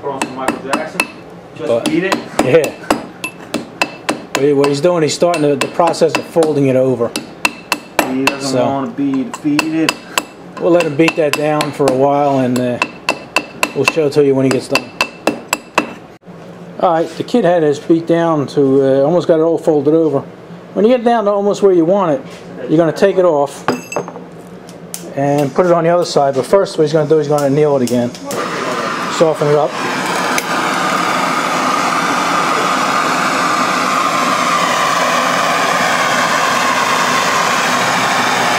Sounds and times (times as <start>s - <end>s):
Speech: 0.0s - 2.8s, 4.4s - 7.2s, 8.0s - 10.0s, 10.6s - 12.9s, 13.8s - 14.9s, 16.8s - 23.6s, 25.1s - 28.4s, 29.1s - 29.7s.